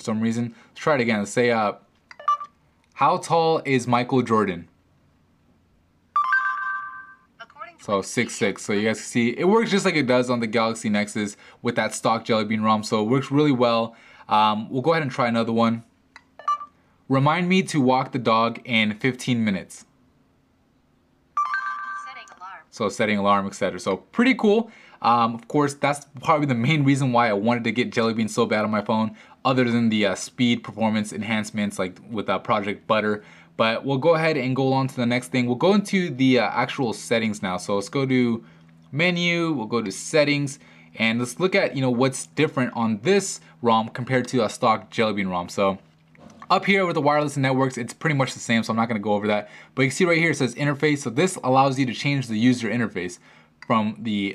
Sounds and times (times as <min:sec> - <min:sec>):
Speech: 0:00.0 - 0:01.8, 0:03.0 - 0:04.7, 0:07.4 - 0:15.9, 0:17.1 - 0:19.9, 0:22.0 - 0:45.8, 0:46.5 - 0:54.3.